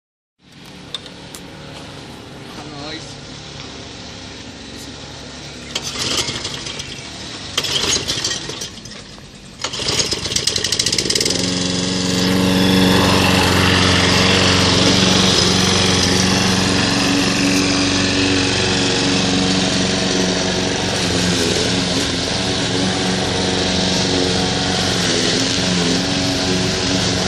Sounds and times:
Lawn mower: 0:00.4 - 0:27.2
Speech: 0:02.6 - 0:03.2.

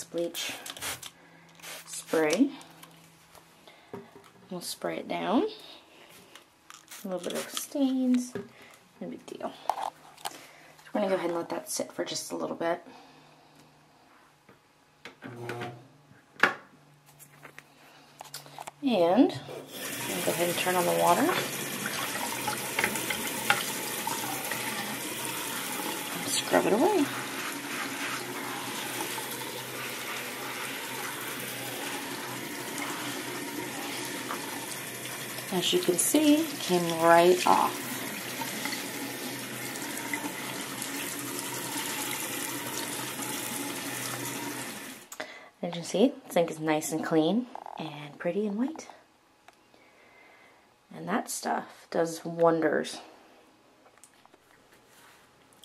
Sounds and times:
Speech: 0:02.0 - 0:02.6, 0:04.5 - 0:05.6, 0:07.0 - 0:08.4, 0:09.0 - 0:09.6, 0:10.9 - 0:12.8, 0:18.8 - 0:19.4, 0:20.1 - 0:21.4, 0:26.2 - 0:27.2, 0:35.5 - 0:37.8, 0:45.6 - 0:49.0, 0:50.9 - 0:53.1
Fill (with liquid): 0:19.7 - 0:45.1.

